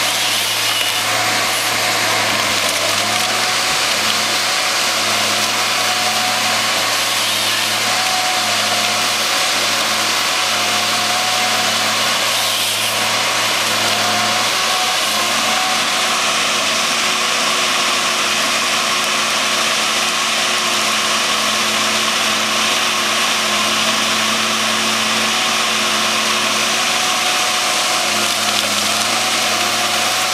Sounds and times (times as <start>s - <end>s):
Power tool: 0.0s - 30.3s.